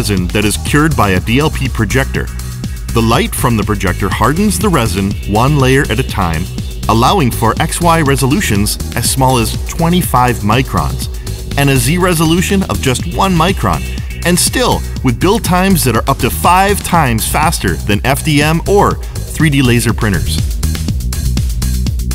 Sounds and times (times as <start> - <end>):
Speech: 0.0 - 2.3, 2.9 - 20.4
Music: 0.0 - 22.1.